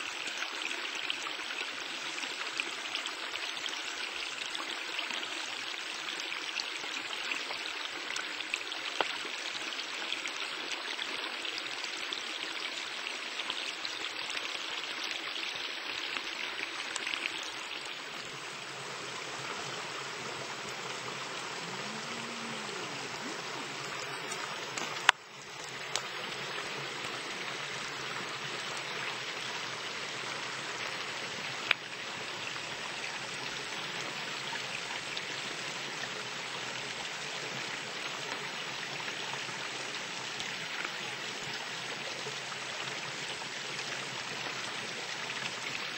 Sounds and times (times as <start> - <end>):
Stream: 0.0 - 45.9.